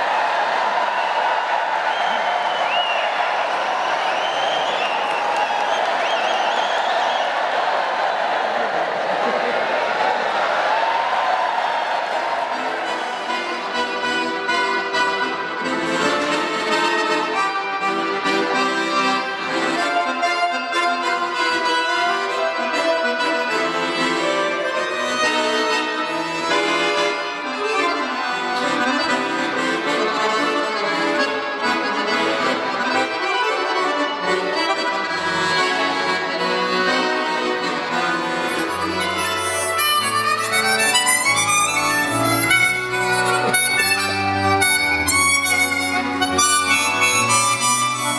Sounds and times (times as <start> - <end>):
Music: 12.4 - 48.1.